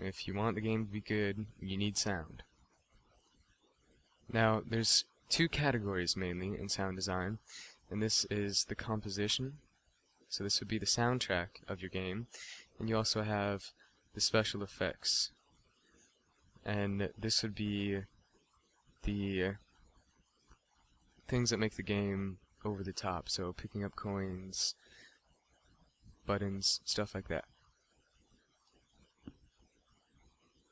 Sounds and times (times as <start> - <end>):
Speech: 0.0 - 2.5, 4.3 - 9.6, 10.3 - 15.4, 16.6 - 18.1, 19.0 - 19.7, 21.3 - 24.8, 26.2 - 27.5.